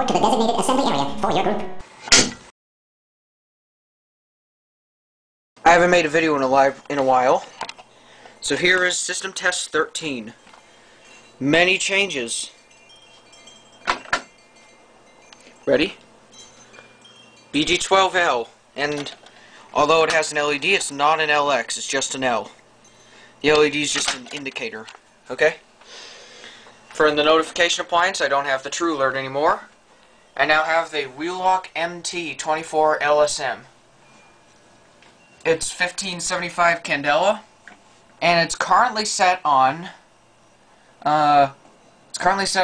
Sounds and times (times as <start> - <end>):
Speech: 0.0 - 1.8, 5.6 - 7.5, 8.4 - 10.4, 11.4 - 12.6, 15.7 - 16.0, 17.6 - 19.2, 19.8 - 22.6, 23.4 - 25.6, 27.0 - 29.7, 30.4 - 33.7, 35.5 - 37.5, 38.2 - 40.0, 41.0 - 41.6, 42.2 - 42.6.